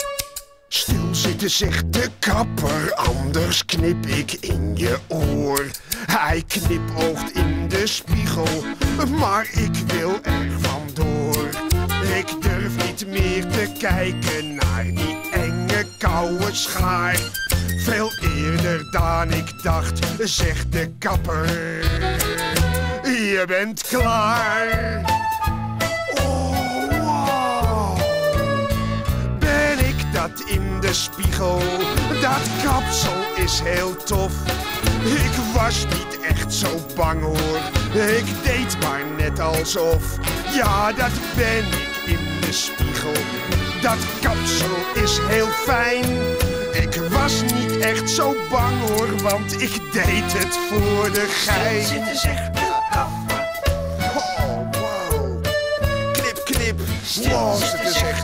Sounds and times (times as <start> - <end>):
Music: 0.0 - 58.2.